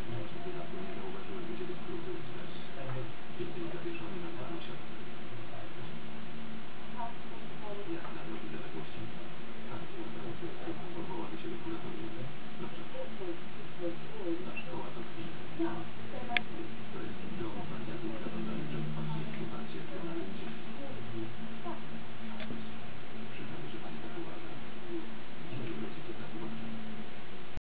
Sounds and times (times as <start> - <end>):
Speech: 0.0 - 27.1.